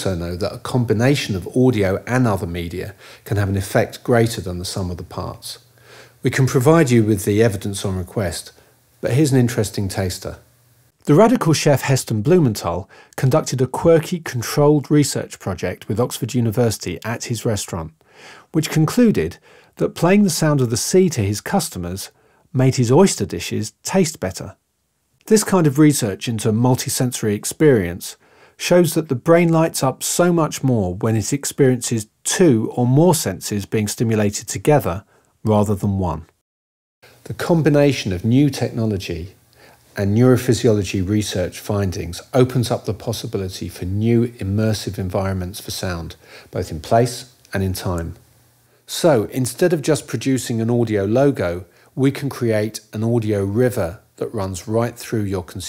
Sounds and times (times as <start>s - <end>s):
Speech: 0.0s - 24.6s, 25.2s - 36.4s, 37.2s - 39.4s, 40.0s - 48.2s, 48.9s - 55.6s.